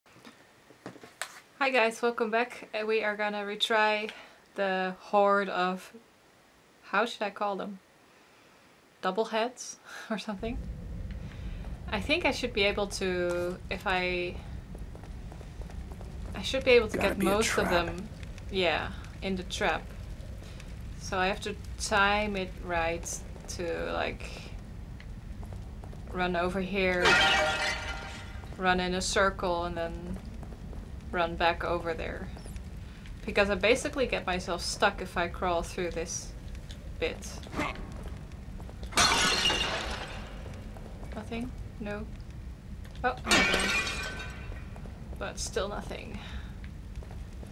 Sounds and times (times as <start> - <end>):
Speech: 1.6 - 6.0, 6.8 - 7.8, 9.0 - 10.6, 11.9 - 14.4, 16.4 - 19.8, 21.0 - 24.5, 26.1 - 27.1, 28.6 - 30.2, 31.1 - 32.4, 33.2 - 36.3, 37.0 - 37.7, 41.2 - 42.1, 43.0 - 43.3, 45.2 - 46.4.